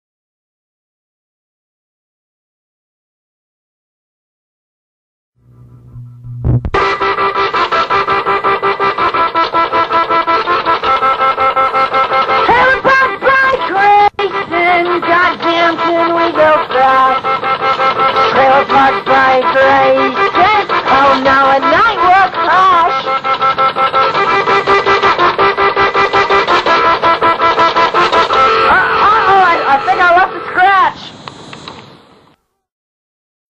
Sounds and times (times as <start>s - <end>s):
Music: 5.4s - 30.8s
Speech: 12.5s - 17.2s, 18.4s - 23.0s, 28.7s - 31.1s.